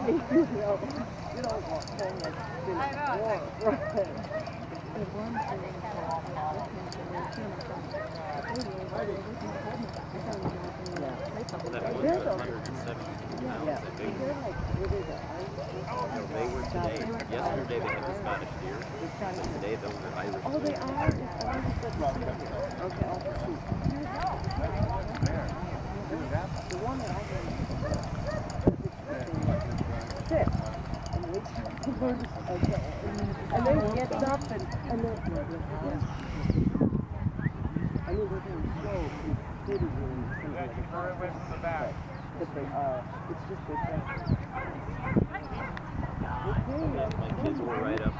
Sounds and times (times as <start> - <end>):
Speech: 0.0 - 27.6, 29.0 - 36.1, 37.0 - 48.1
Outside, rural or natural: 0.0 - 48.1.